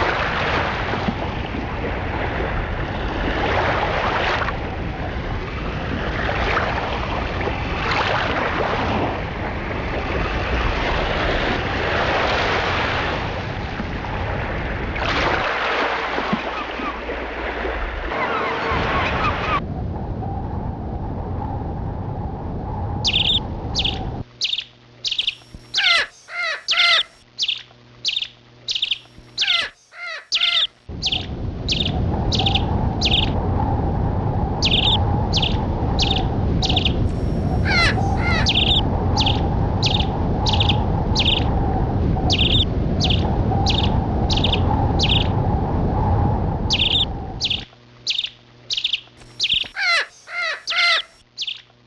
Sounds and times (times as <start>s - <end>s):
Chirp, tweet: 23.1s - 33.3s, 34.6s - 37.0s, 37.8s - 41.5s, 42.3s - 45.3s, 46.7s - 51.7s.